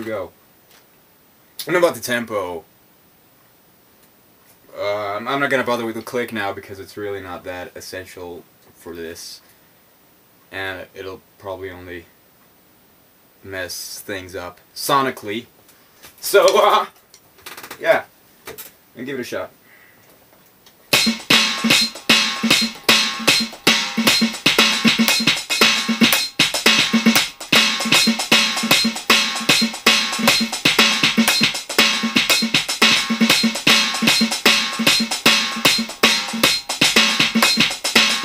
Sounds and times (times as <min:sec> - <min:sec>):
Speech: 0:00.0 - 0:00.4, 0:01.6 - 0:02.7, 0:04.7 - 0:09.4, 0:10.5 - 0:12.1, 0:13.4 - 0:15.5, 0:16.2 - 0:17.0, 0:17.8 - 0:18.1, 0:19.0 - 0:19.6
Inside, small room: 0:00.0 - 0:38.2
Drum: 0:20.9 - 0:38.2
Drum machine: 0:20.9 - 0:38.2.